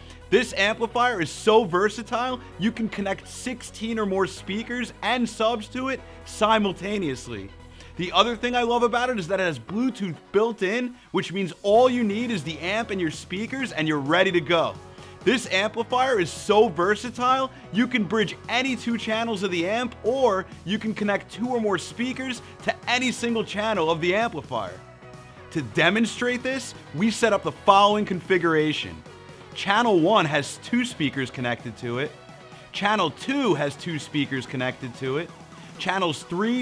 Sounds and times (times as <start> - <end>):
Music: 0.0 - 36.6
Speech: 0.3 - 24.8, 25.6 - 29.0, 29.6 - 36.6.